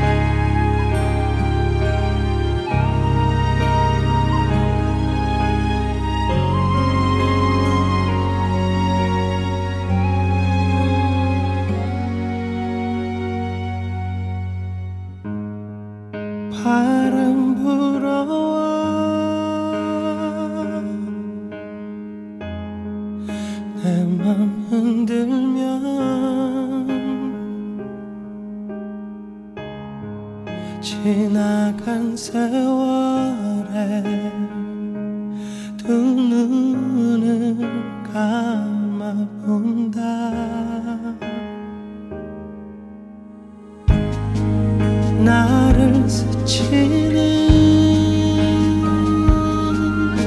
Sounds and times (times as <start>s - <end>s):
Music: 0.0s - 50.2s.